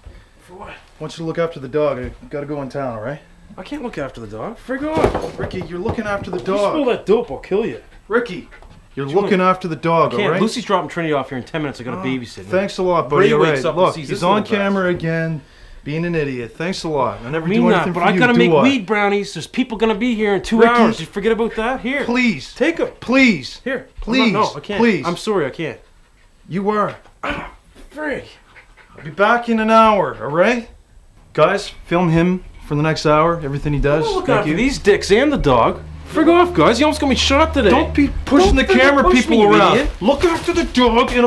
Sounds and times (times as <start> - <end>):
Speech: 0.5 - 25.8, 31.4 - 41.2.